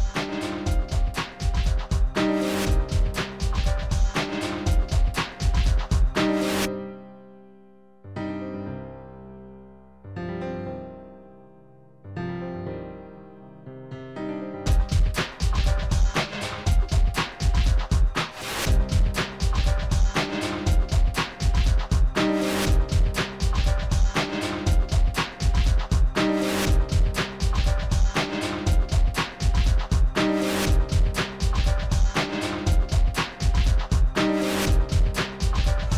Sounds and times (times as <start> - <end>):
Music: 0.0 - 35.9.